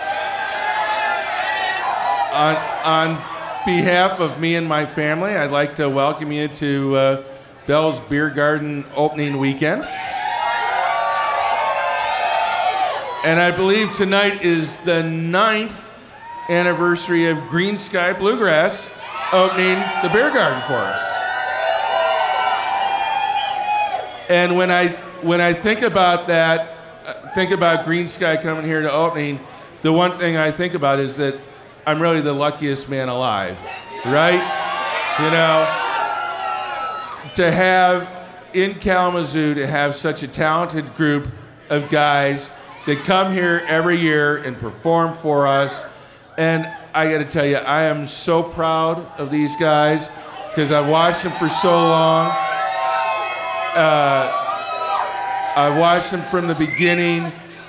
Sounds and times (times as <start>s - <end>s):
Speech: 2.4s - 9.9s, 13.2s - 21.2s, 24.3s - 34.5s, 35.2s - 35.8s, 37.3s - 52.4s, 53.8s - 54.4s, 55.6s - 57.4s.